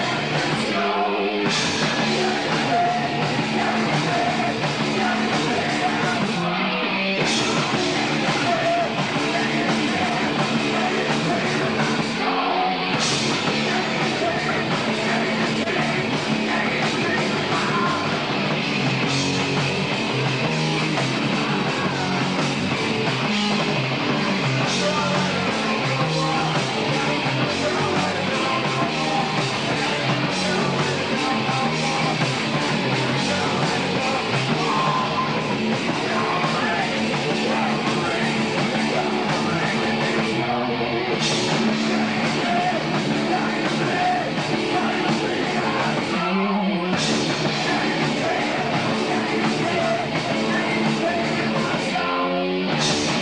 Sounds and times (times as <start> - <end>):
Music: 0.0 - 53.2.